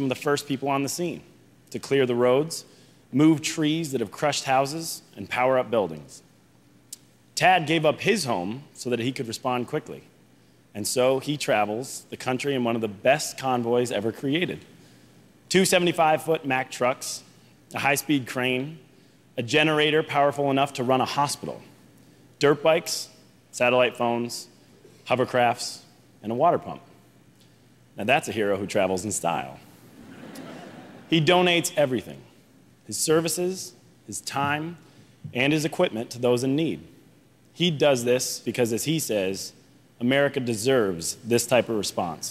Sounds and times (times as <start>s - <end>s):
Male speech, man speaking: 0.0s - 6.2s, 7.4s - 10.1s, 10.8s - 14.6s, 15.5s - 18.8s, 19.4s - 21.7s, 22.4s - 24.5s, 25.1s - 26.9s, 28.0s - 29.6s, 31.1s - 32.3s, 32.9s - 36.9s, 37.6s - 42.3s
Narration, monologue: 0.0s - 42.3s.